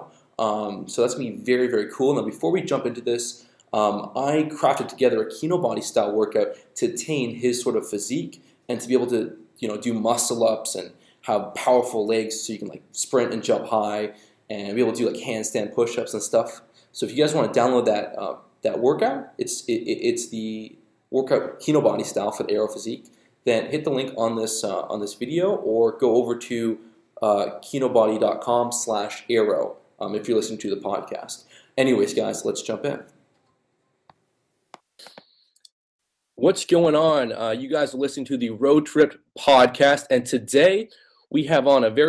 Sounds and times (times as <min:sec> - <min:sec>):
Speech: 0:00.0 - 0:33.2, 0:36.4 - 0:42.0.